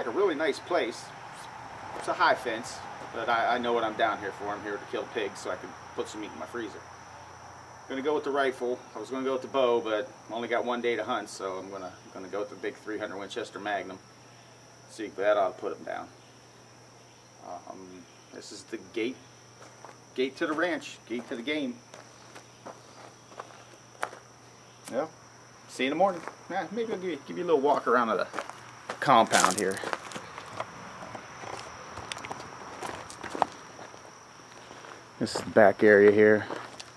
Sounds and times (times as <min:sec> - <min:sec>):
Cricket: 0:00.0 - 0:36.9.